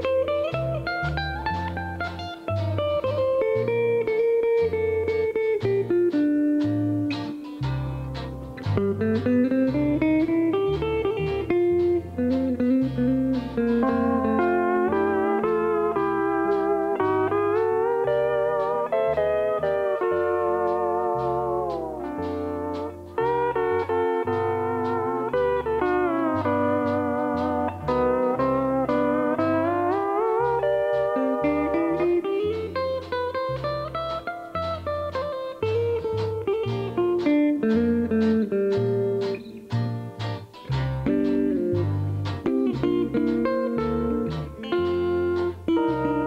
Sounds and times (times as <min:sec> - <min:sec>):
Steel guitar, slide guitar: 0:00.0 - 0:46.2.